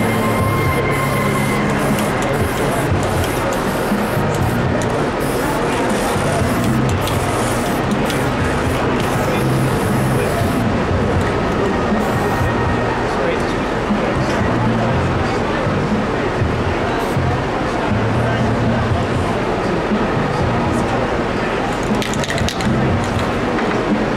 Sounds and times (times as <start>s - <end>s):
Music: 0.0s - 24.1s
Speech: 0.0s - 24.1s
Spray: 1.0s - 4.6s, 5.2s - 10.6s.